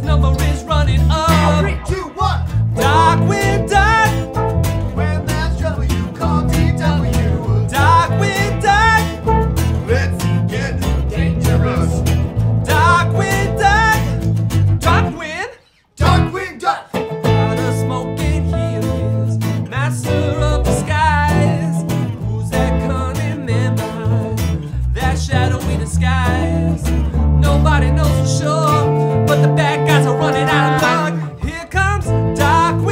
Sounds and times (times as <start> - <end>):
Music: 0.0 - 15.2, 16.0 - 32.9.